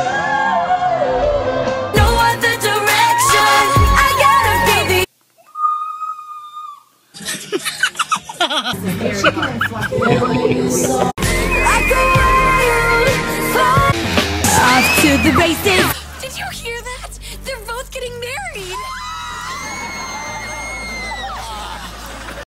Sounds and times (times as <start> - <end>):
Music: 0.0 - 5.1, 10.7 - 20.7
Speech: 14.5 - 18.8.